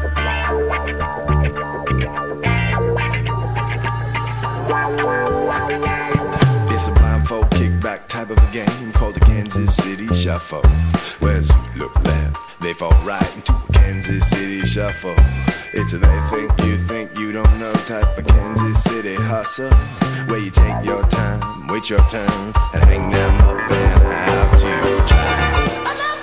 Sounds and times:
Music: 0:00.0 - 0:26.2.

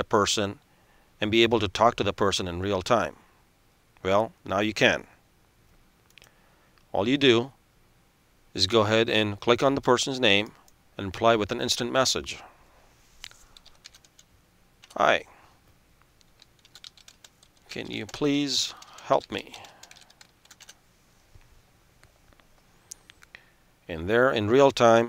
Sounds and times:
Speech: 0:00.0 - 0:00.6, 0:01.2 - 0:03.2, 0:04.0 - 0:05.2, 0:06.9 - 0:07.6, 0:08.6 - 0:12.5, 0:14.9 - 0:15.3, 0:17.7 - 0:19.7, 0:23.9 - 0:25.0.

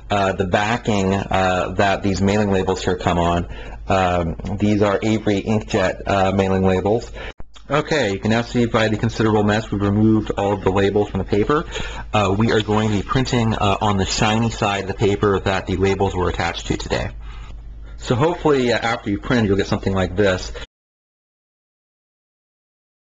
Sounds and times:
Speech: 0:00.0 - 0:17.2, 0:18.0 - 0:20.7.

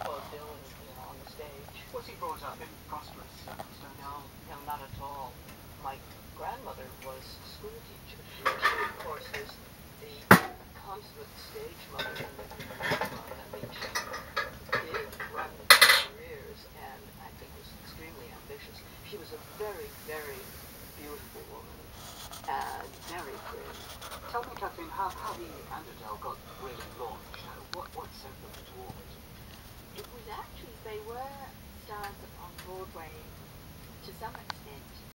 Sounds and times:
Speech: 0:00.0 - 0:29.2, 0:29.9 - 0:33.3, 0:34.0 - 0:35.1.

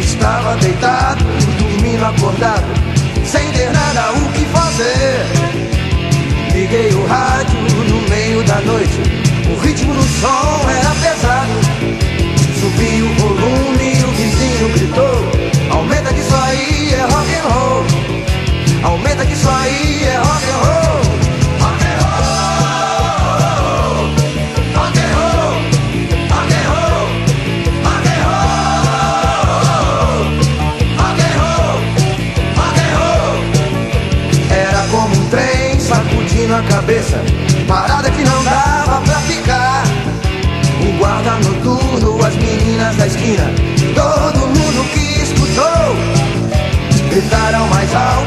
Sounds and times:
Music: 0:00.0 - 0:48.2.

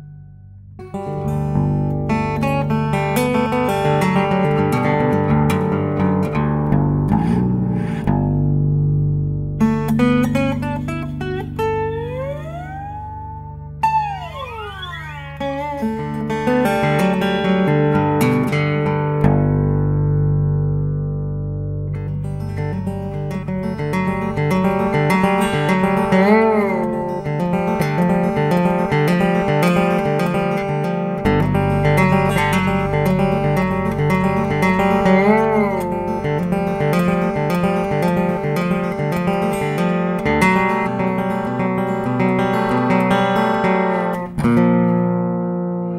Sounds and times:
Acoustic guitar: 0:00.0 - 0:45.9
Strum: 0:00.0 - 0:45.9.

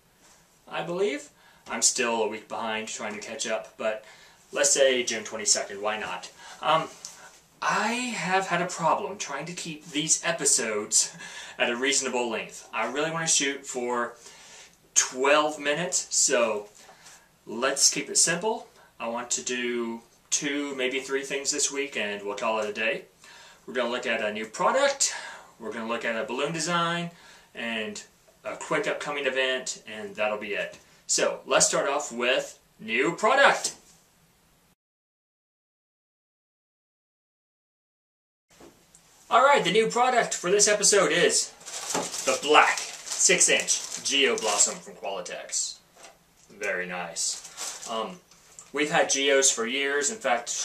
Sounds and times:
Speech: 0:00.7 - 0:14.2, 0:15.0 - 0:16.8, 0:17.5 - 0:23.1, 0:23.7 - 0:33.8, 0:39.3 - 0:45.8, 0:46.5 - 0:50.6.

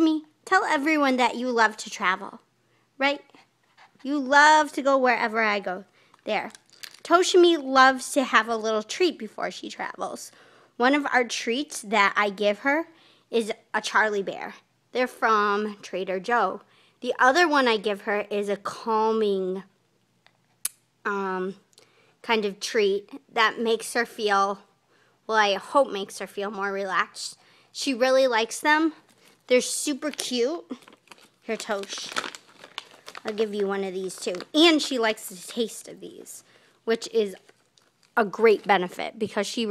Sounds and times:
Speech: 0:00.0 - 0:03.4, 0:04.0 - 0:19.7, 0:21.1 - 0:24.7, 0:25.3 - 0:30.8, 0:31.5 - 0:32.2, 0:33.2 - 0:37.5, 0:38.2 - 0:39.7.

